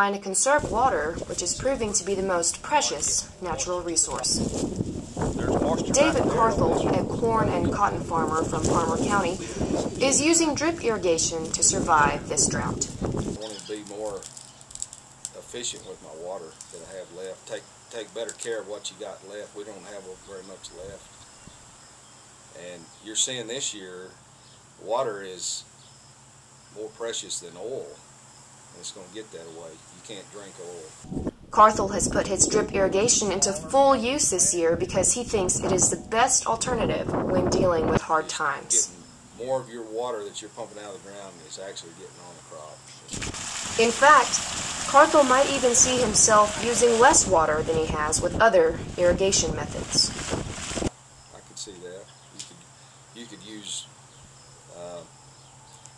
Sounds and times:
Speech: 0.0s - 4.4s, 5.4s - 14.2s, 15.4s - 21.0s, 22.6s - 24.1s, 24.8s - 25.6s, 26.8s - 28.0s, 28.8s - 30.9s, 31.6s - 43.2s, 43.8s - 50.1s, 51.4s - 52.6s, 53.2s - 53.9s, 54.7s - 55.1s.

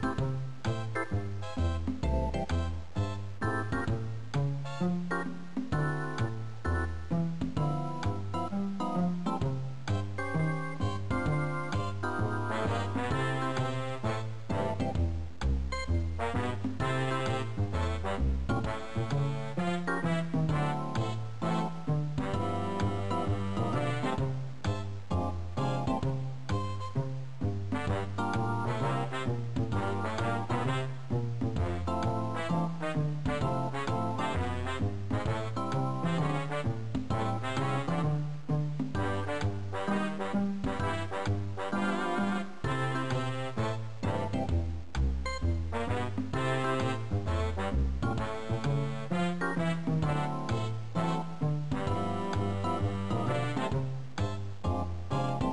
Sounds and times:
Music: 0.0s - 55.5s.

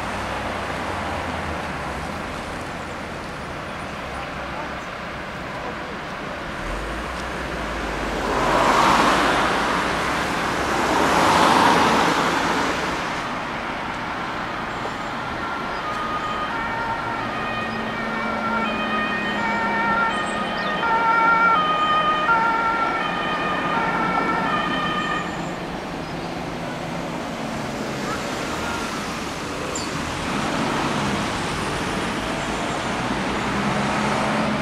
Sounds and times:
Speech: 4.0s - 6.6s.

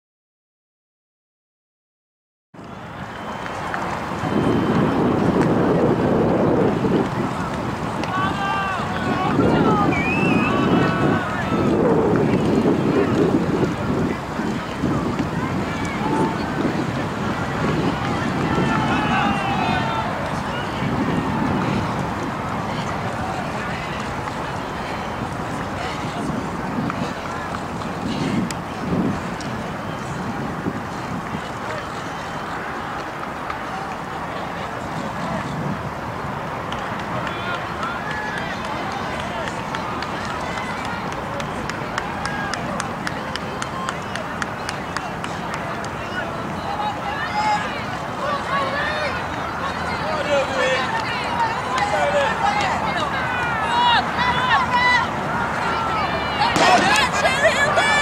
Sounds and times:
Outside, rural or natural: 2.6s - 58.0s
Speech: 5.3s - 35.8s, 36.8s - 58.0s.

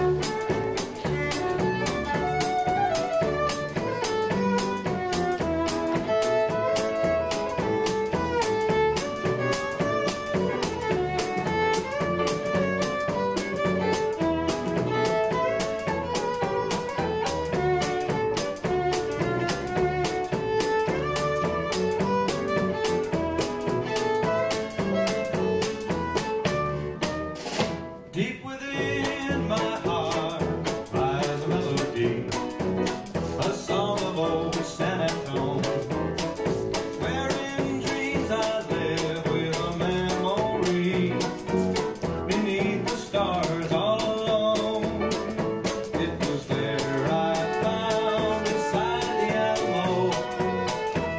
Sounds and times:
Violin, fiddle: 0.0s - 51.1s.

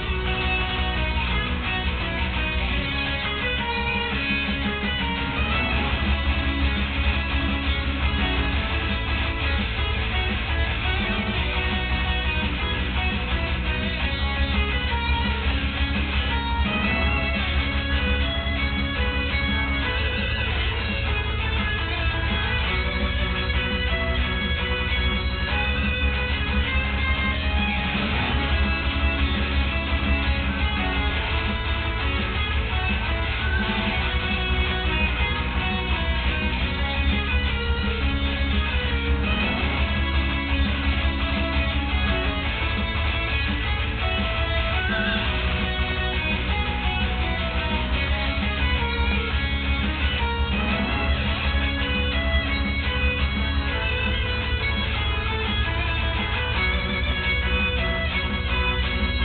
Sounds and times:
Guitar: 0.0s - 59.2s.

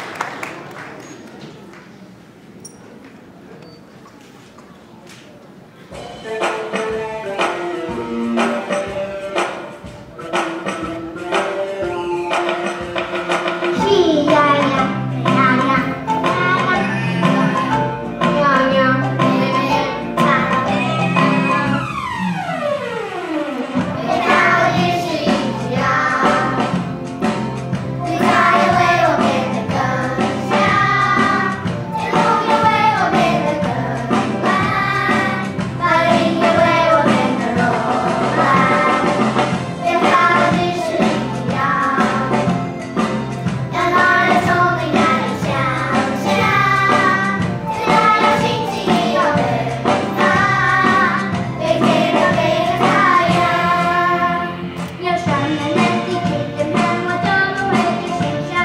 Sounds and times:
Music: 5.9s - 58.6s.

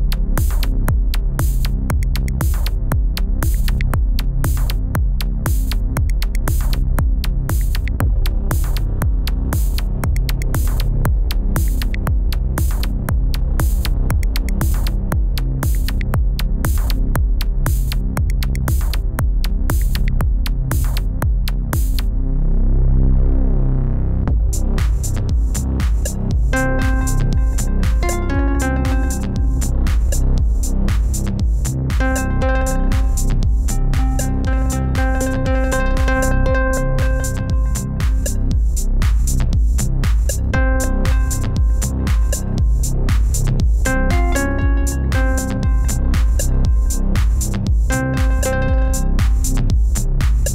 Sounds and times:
Techno: 0.0s - 22.1s, 24.3s - 50.5s.

